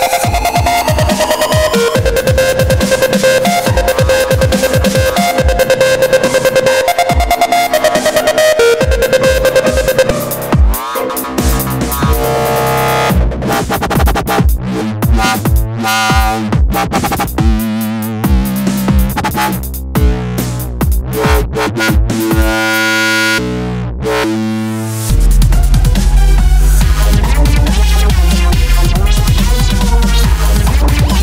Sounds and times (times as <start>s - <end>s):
Dubstep: 0.0s - 31.2s.